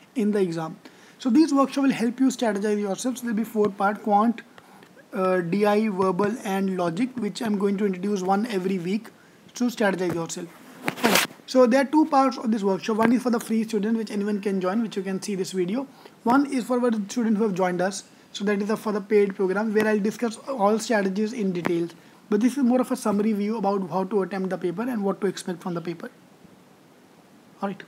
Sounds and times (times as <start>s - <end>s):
Speech: 0.2s - 4.5s, 5.1s - 26.2s, 27.6s - 27.8s.